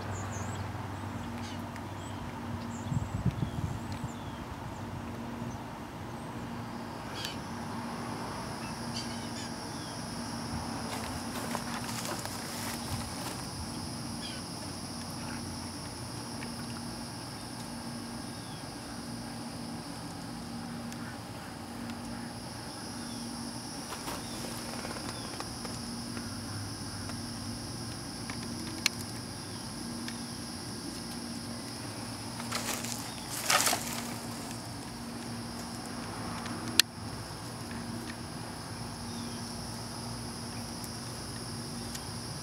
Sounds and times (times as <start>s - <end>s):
Insect: 0.0s - 42.4s.